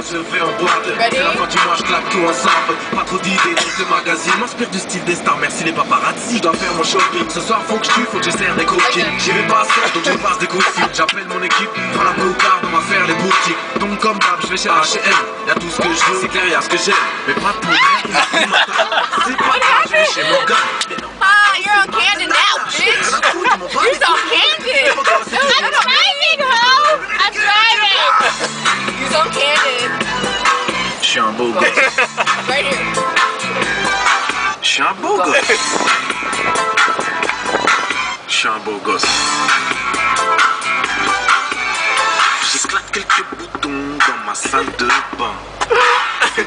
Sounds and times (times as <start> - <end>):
Motor vehicle (road): 0.0 - 46.4
Music: 0.0 - 46.4.